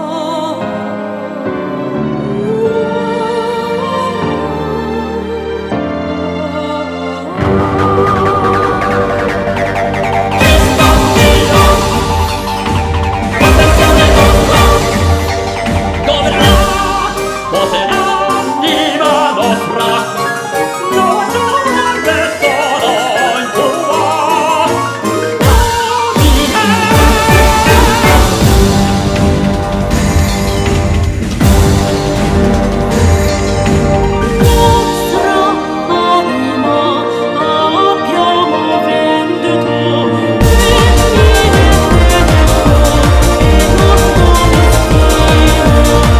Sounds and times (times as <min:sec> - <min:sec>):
Opera: 0:00.0 - 0:29.9, 0:31.4 - 0:46.1.